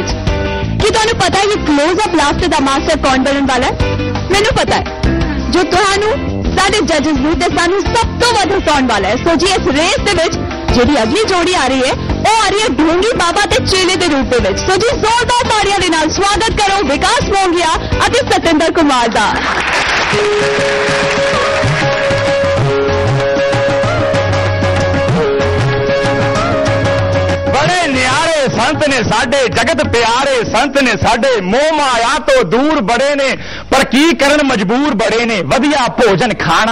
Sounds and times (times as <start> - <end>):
Music: 0.0 - 36.7
Speech: 27.6 - 36.7.